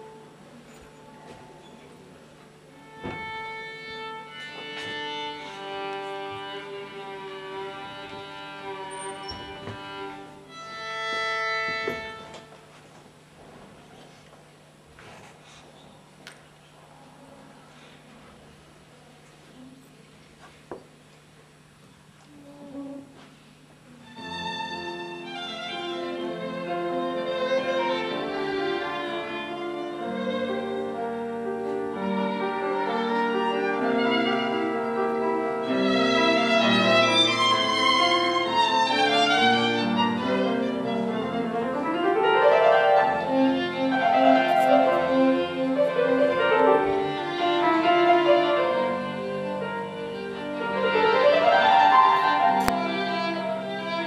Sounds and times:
Violin, fiddle: 0:02.7 - 0:12.6, 0:24.0 - 0:54.0.

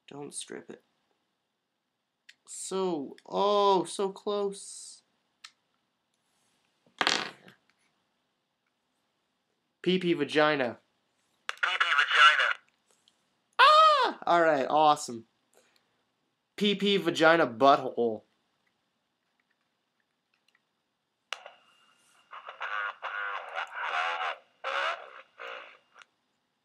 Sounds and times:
Speech: 0:00.0 - 0:00.8, 0:02.4 - 0:05.1, 0:09.8 - 0:10.8, 0:13.9 - 0:15.3, 0:16.6 - 0:18.3
Inside, small room: 0:00.0 - 0:26.6.

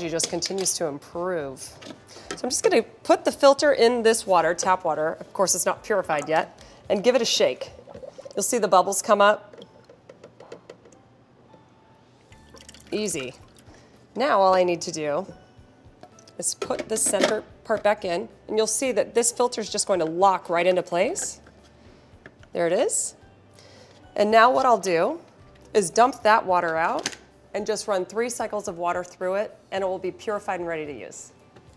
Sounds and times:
Music: 0:00.0 - 0:31.7.

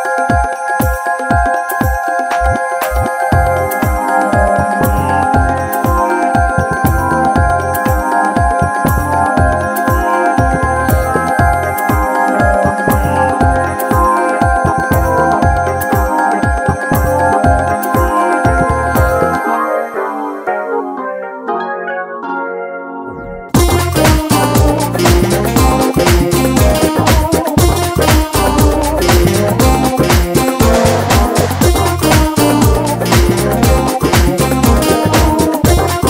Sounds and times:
Music: 0:00.0 - 0:36.1.

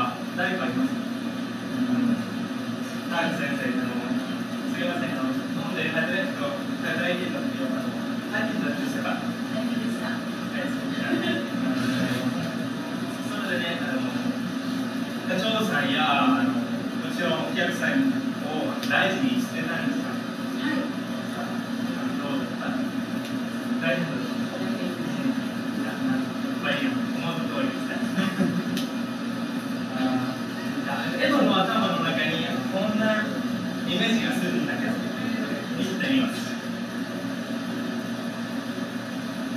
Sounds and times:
Male speech, man speaking: 0:00.0 - 0:01.0, 0:03.1 - 0:09.3, 0:13.2 - 0:14.3, 0:15.3 - 0:20.2, 0:22.0 - 0:22.9, 0:23.8 - 0:24.4, 0:26.6 - 0:28.4, 0:29.9 - 0:36.6
Conversation: 0:00.0 - 0:39.5.

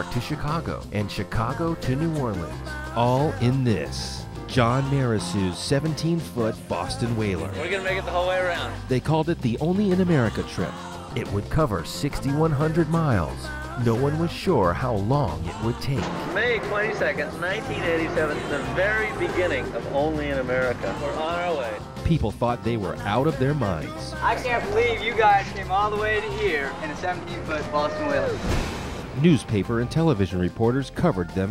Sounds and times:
Speech: 0:00.0 - 0:28.4, 0:29.2 - 0:31.5
Music: 0:00.0 - 0:31.5.

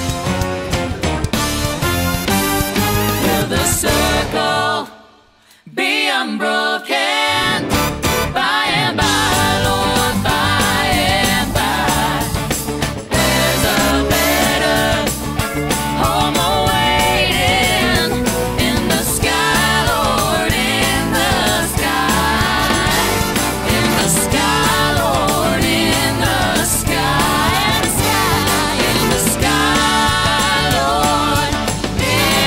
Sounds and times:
Exciting music: 0:00.0 - 0:04.9, 0:07.3 - 0:32.4.

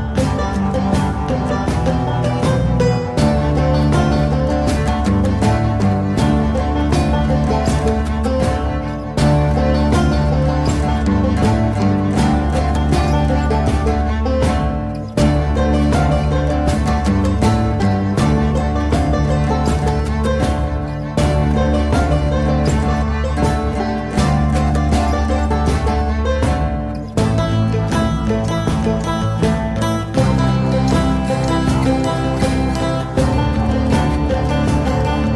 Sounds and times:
Country: 0:00.0 - 0:35.3
Soundtrack music: 0:00.0 - 0:35.3.

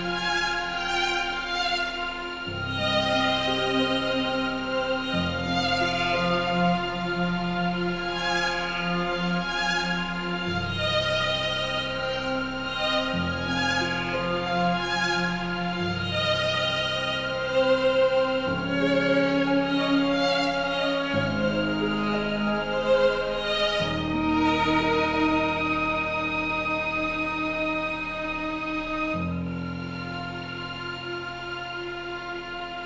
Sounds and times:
Music: 0:00.0 - 0:32.8.

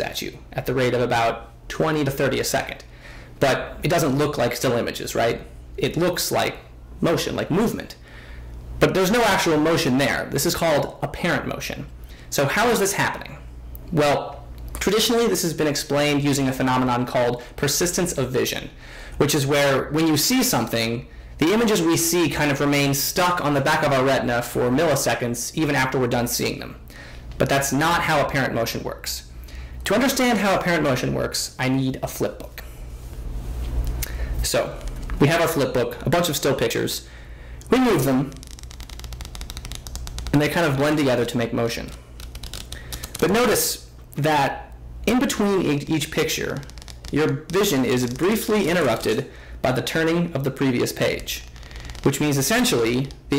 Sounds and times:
Speech: 0:00.0 - 0:08.0, 0:08.8 - 0:26.8, 0:27.4 - 0:32.7, 0:34.4 - 0:37.1, 0:37.7 - 0:38.4, 0:40.3 - 0:42.0, 0:43.2 - 0:51.5, 0:52.1 - 0:53.3.

